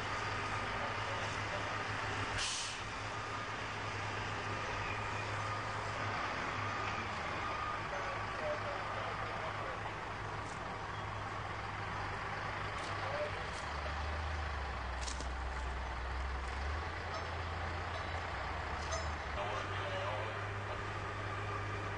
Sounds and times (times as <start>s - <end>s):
Car: 0.0s - 21.9s.